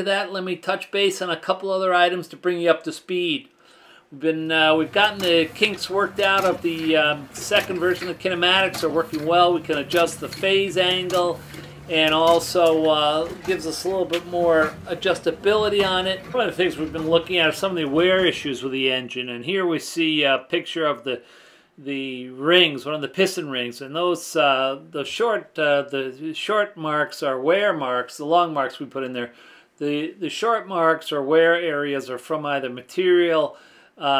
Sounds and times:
Speech: 0:00.0 - 0:03.5, 0:04.1 - 0:21.2, 0:21.8 - 0:34.2.

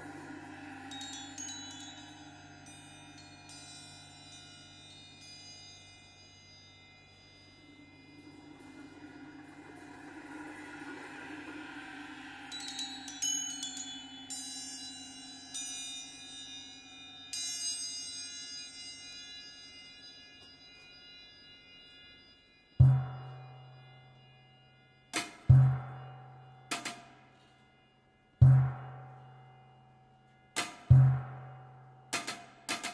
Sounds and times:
Cymbal: 0:00.0 - 0:32.9.

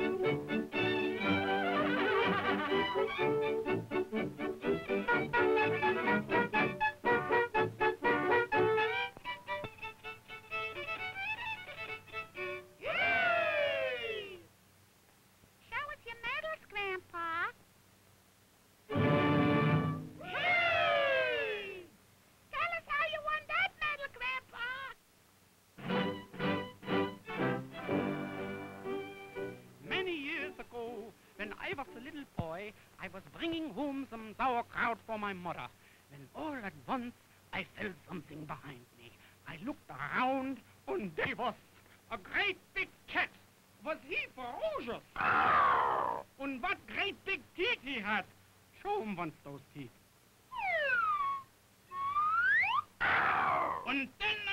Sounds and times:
Music: 0:00.0 - 0:12.8, 0:18.9 - 0:20.3, 0:25.8 - 0:32.2
Speech: 0:12.8 - 0:14.5, 0:15.6 - 0:17.6, 0:20.2 - 0:25.0, 0:29.8 - 0:45.3, 0:46.0 - 0:50.0, 0:53.5 - 0:54.5.

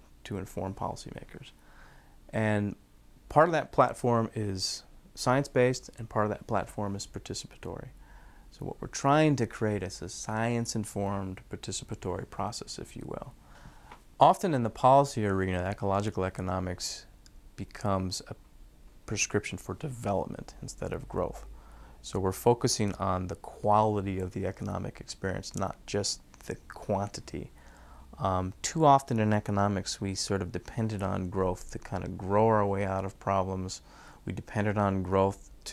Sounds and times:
Speech: 0:00.0 - 0:01.6, 0:02.3 - 0:13.4, 0:14.2 - 0:18.4, 0:19.1 - 0:27.6, 0:28.2 - 0:35.7.

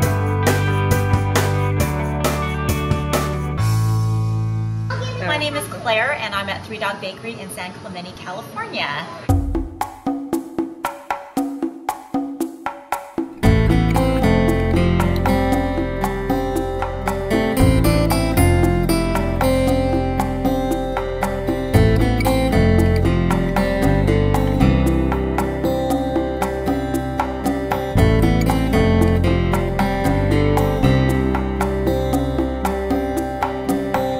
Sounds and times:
Music: 0:00.0 - 0:06.3, 0:09.3 - 0:34.1.

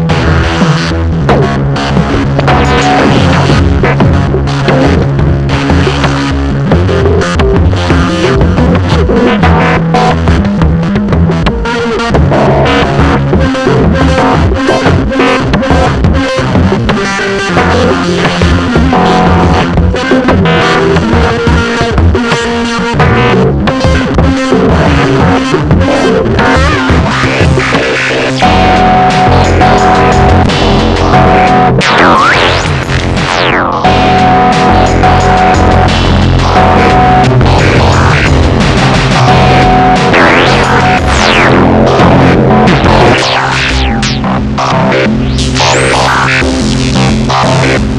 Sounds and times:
Electronic music: 0:00.0 - 0:47.9
Synthesizer: 0:00.0 - 0:47.9.

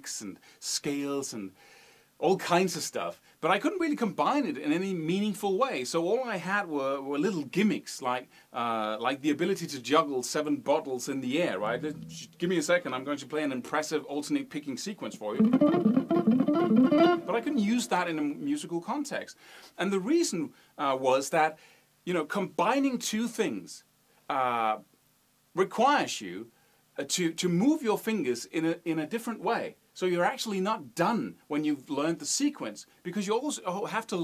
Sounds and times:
Speech: 0:00.0 - 0:01.6, 0:02.2 - 0:15.4, 0:17.3 - 0:24.9, 0:25.6 - 0:34.2.

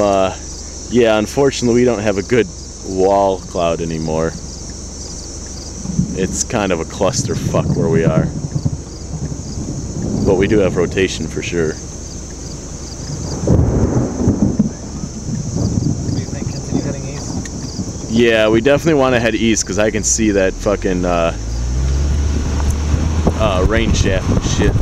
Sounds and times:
Wind noise (microphone): 0:05.8 - 0:11.8, 0:13.0 - 0:19.2, 0:22.2 - 0:24.8.

